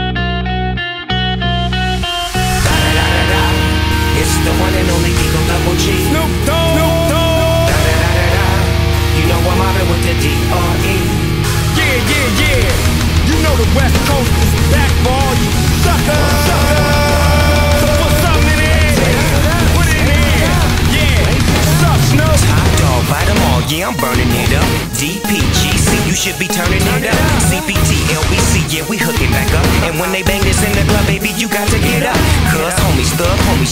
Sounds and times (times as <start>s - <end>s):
Electric guitar: 0.0s - 33.7s
Strum: 0.6s - 24.9s.